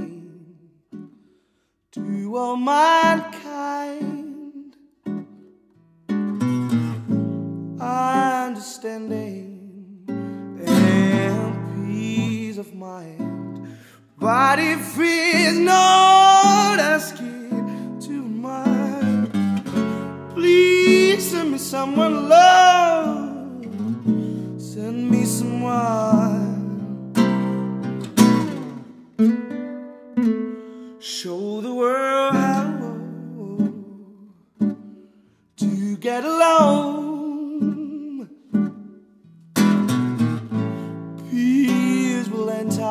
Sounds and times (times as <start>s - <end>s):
Acoustic guitar: 0.0s - 42.9s.